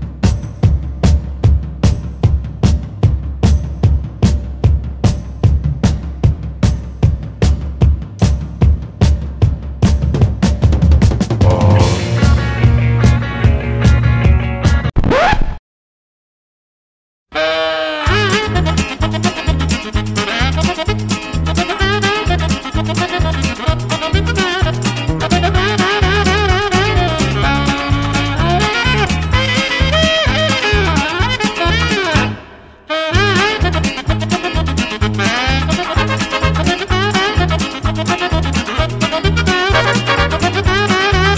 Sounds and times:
Music: 0.0s - 15.0s, 17.4s - 41.3s.

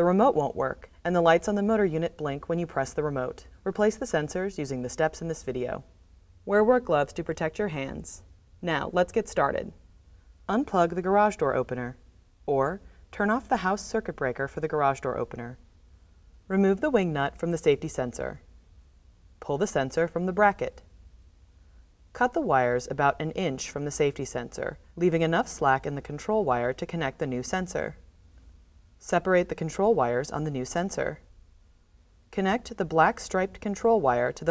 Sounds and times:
Speech: 0.0s - 5.9s, 6.5s - 9.8s, 10.5s - 15.6s, 16.5s - 18.5s, 19.4s - 20.9s, 22.2s - 28.0s, 29.0s - 31.3s, 32.3s - 34.5s.

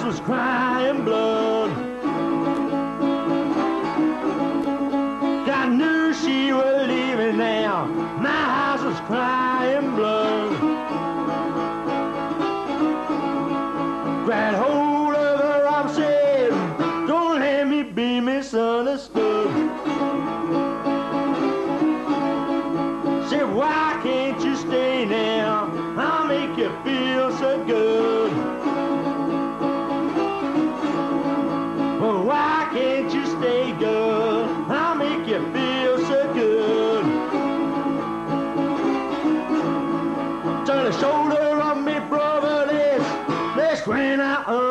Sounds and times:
Music: 0.0s - 44.7s.

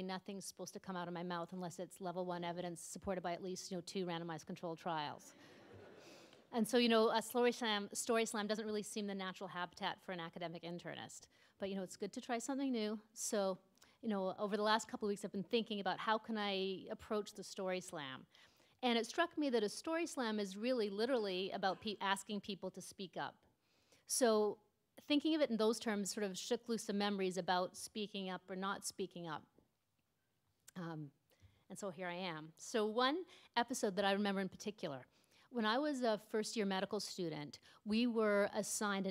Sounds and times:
Speech: 0.0s - 5.3s, 6.5s - 18.2s, 18.8s - 23.4s, 24.1s - 29.5s, 30.7s - 31.1s, 31.7s - 39.1s.

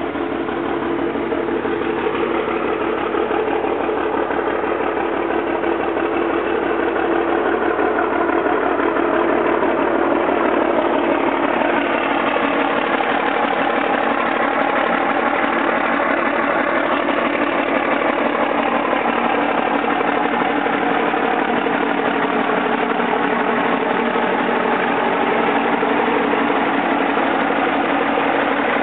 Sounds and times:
Truck: 0.0s - 28.8s.

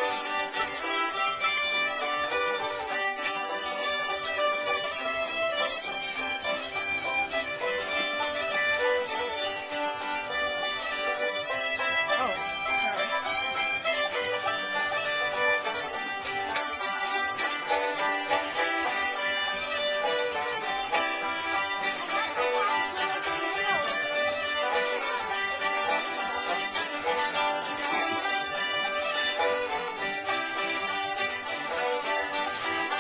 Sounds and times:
Music: 0.0s - 33.0s
Speech: 11.9s - 12.5s, 23.0s - 24.1s.

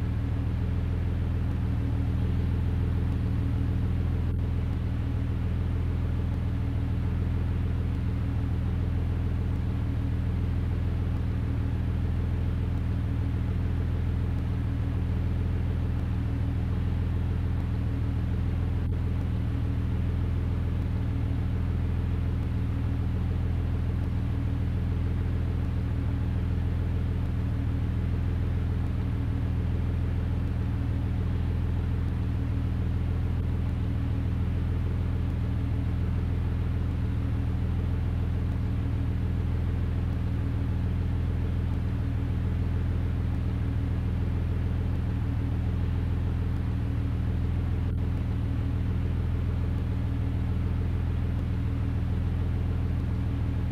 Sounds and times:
Vehicle: 0.0s - 53.7s.

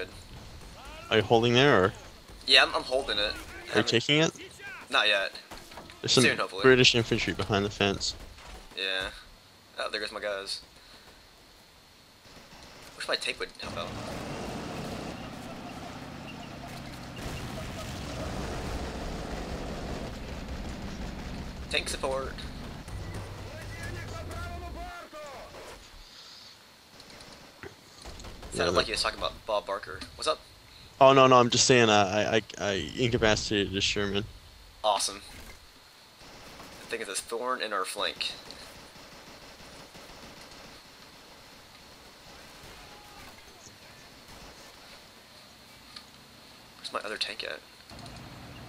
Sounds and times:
Speech: 0.8s - 8.2s, 23.5s - 25.6s, 31.0s - 34.3s, 46.8s - 47.6s.

